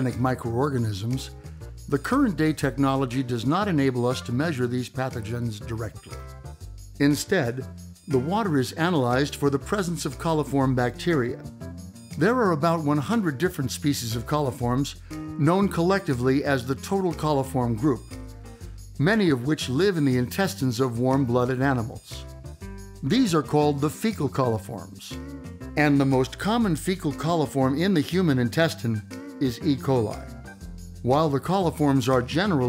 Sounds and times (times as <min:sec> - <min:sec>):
Speech: 0:00.0 - 0:06.1, 0:07.0 - 0:11.5, 0:12.2 - 0:18.0, 0:19.0 - 0:22.2, 0:23.0 - 0:25.2, 0:25.8 - 0:30.3, 0:31.0 - 0:32.6
Music: 0:00.0 - 0:32.6.